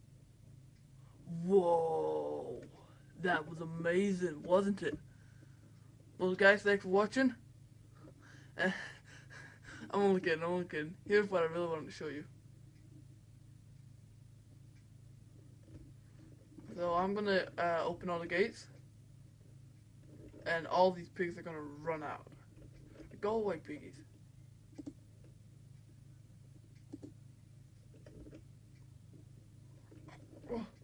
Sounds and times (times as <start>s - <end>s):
Speech: 1.3s - 5.0s, 6.2s - 7.4s, 8.6s - 9.0s, 9.9s - 12.3s, 16.7s - 18.8s, 20.4s - 22.4s, 23.1s - 24.1s.